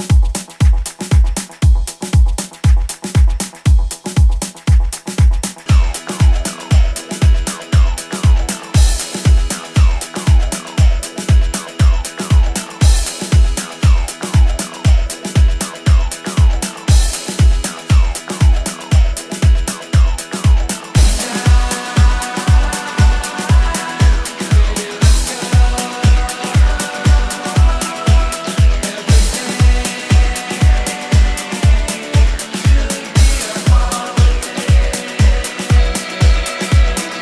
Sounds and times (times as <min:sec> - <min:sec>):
Disco: 0:00.0 - 0:37.2.